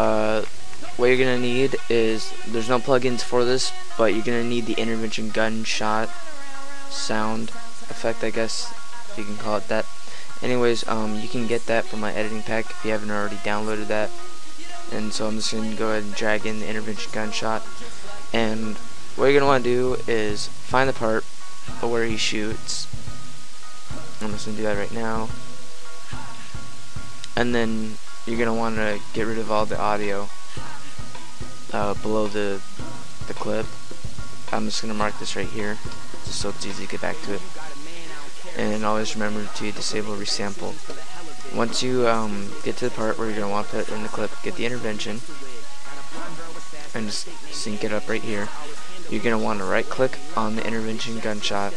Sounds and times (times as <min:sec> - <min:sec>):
Speech: 0:00.0 - 0:06.2, 0:06.9 - 0:21.2, 0:21.8 - 0:22.9, 0:24.2 - 0:25.4, 0:27.3 - 0:30.8, 0:31.7 - 0:32.7, 0:33.3 - 0:33.8, 0:34.5 - 0:51.7
Music: 0:00.0 - 0:51.7.